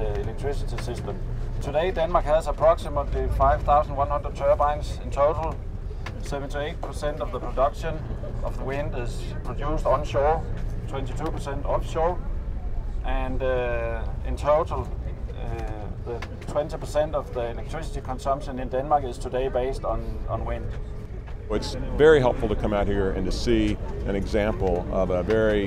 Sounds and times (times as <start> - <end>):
Speech: 0.0 - 5.6, 6.2 - 12.2, 13.0 - 20.8, 21.5 - 25.6.